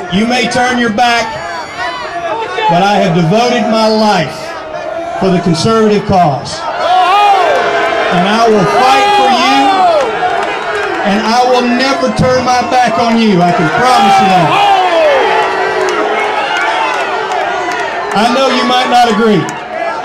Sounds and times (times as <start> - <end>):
Speech: 0.0 - 1.3, 2.4 - 4.6, 5.2 - 6.6, 8.1 - 9.8, 11.0 - 14.6, 18.2 - 19.5
Crowd: 0.0 - 20.0
Outside, urban or manmade: 0.0 - 20.0.